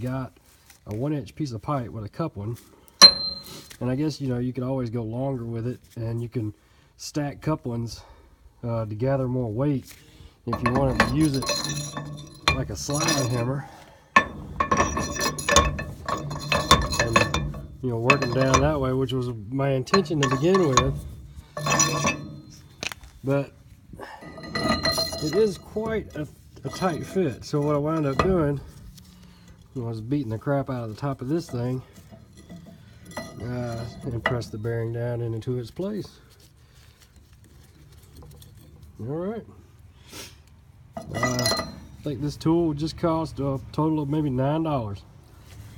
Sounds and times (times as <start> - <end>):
Speech: 0.0 - 2.6, 3.8 - 9.9, 10.5 - 11.8, 12.5 - 13.8, 16.7 - 21.0, 23.2 - 23.6, 25.0 - 28.7, 29.8 - 31.9, 33.4 - 36.2, 39.0 - 39.6, 41.2 - 45.1.